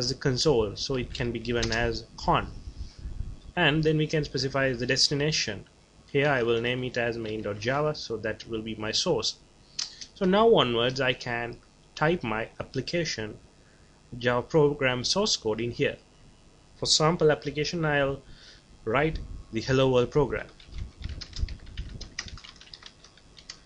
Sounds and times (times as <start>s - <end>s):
Speech: 0.0s - 2.5s, 3.6s - 9.4s, 10.2s - 13.4s, 14.1s - 16.0s, 16.8s - 18.2s, 18.9s - 20.6s.